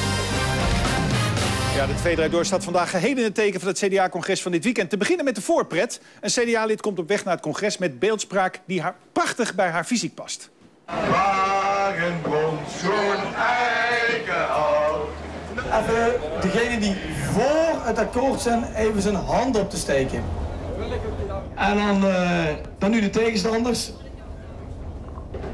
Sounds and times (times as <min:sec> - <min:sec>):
Speech: 0:01.8 - 0:10.5
Vehicle: 0:14.2 - 0:22.8.